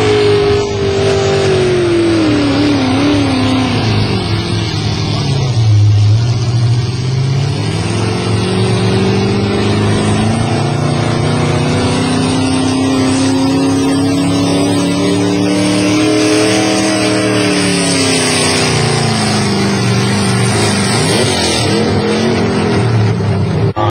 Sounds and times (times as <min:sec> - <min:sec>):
Truck: 0:00.0 - 0:23.9.